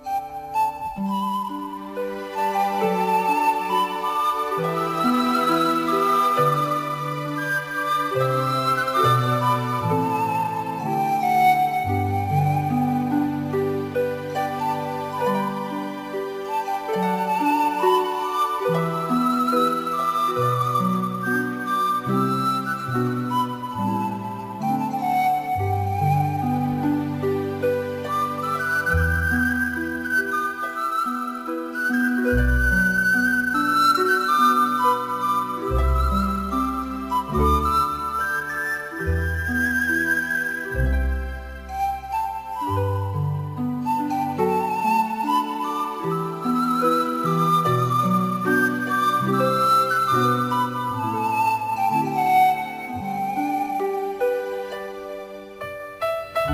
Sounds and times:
Music: 0.0s - 56.5s.

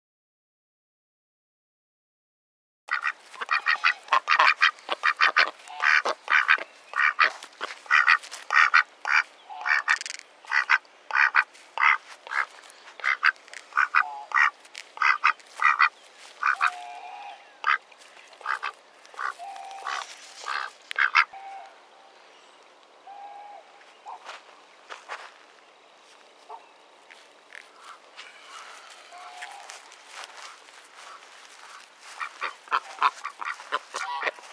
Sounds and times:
Quack: 2.9s - 17.8s, 18.4s - 21.3s, 30.4s - 34.5s.

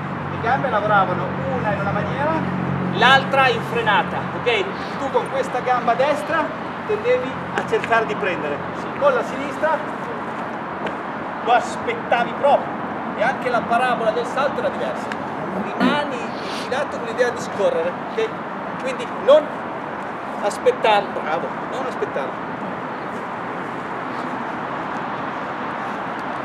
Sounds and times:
Outside, urban or manmade: 0.0s - 26.4s
Speech: 0.3s - 2.4s, 3.0s - 9.9s, 11.5s - 19.5s, 20.4s - 22.4s.

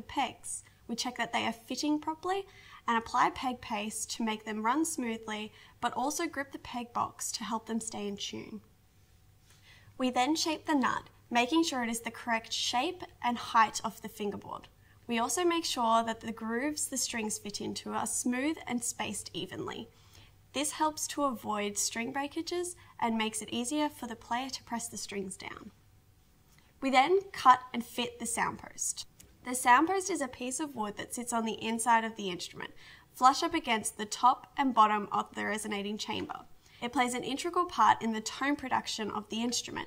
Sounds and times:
Speech: 0.0s - 8.7s, 10.0s - 19.9s, 20.5s - 25.8s, 26.8s - 39.8s.

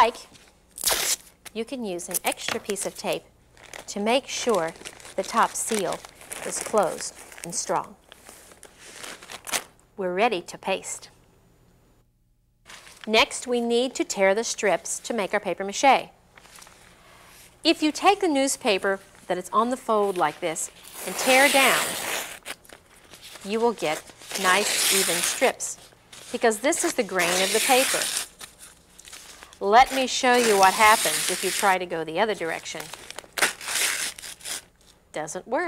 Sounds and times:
Speech: 1.5s - 3.3s, 3.9s - 8.0s, 10.0s - 11.1s, 13.1s - 16.2s, 17.7s - 22.0s, 26.4s - 28.1s, 29.6s - 32.9s, 35.1s - 35.6s.

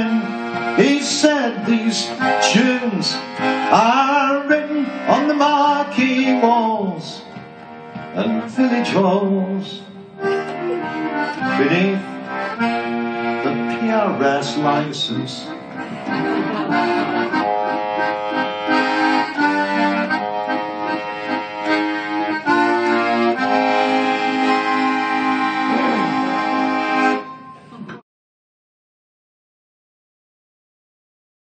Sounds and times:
Accordion: 0.0s - 28.0s.

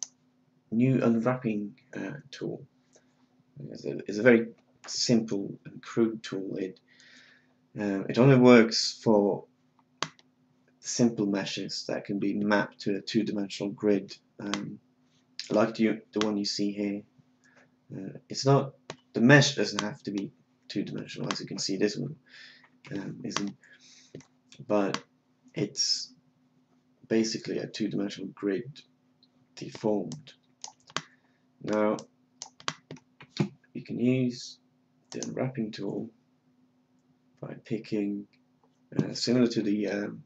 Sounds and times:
Speech: 0.7s - 2.6s, 3.6s - 6.8s, 7.8s - 9.4s, 10.8s - 14.8s, 15.4s - 17.0s, 17.9s - 22.2s, 22.9s - 23.5s, 24.6s - 25.0s, 25.6s - 26.1s, 27.1s - 28.8s, 29.6s - 30.3s, 31.6s - 32.0s, 33.3s - 34.6s, 35.2s - 36.1s, 37.4s - 38.3s, 39.0s - 40.2s.

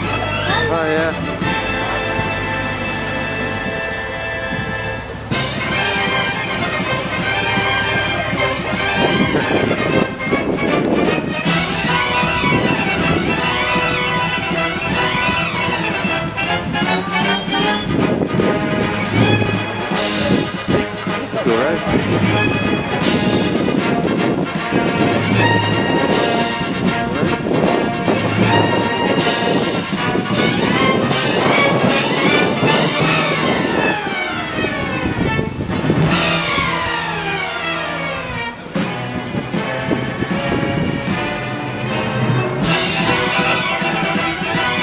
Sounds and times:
Speech: 0.0s - 2.4s, 20.0s - 22.4s
Music: 0.0s - 44.8s.

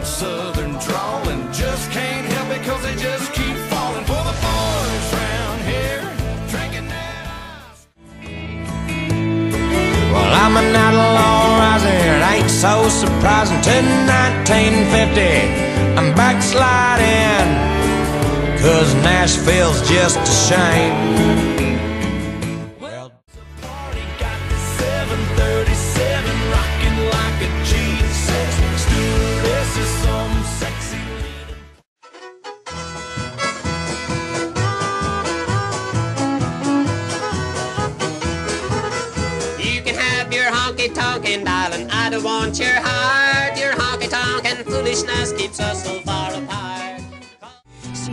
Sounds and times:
Country: 0.0s - 48.1s.

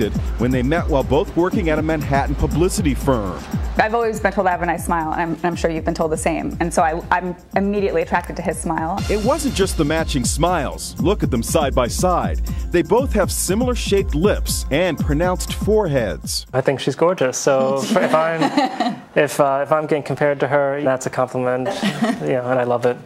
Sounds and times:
Speech: 0.0s - 18.5s, 19.2s - 23.0s
Music: 0.0s - 18.8s.

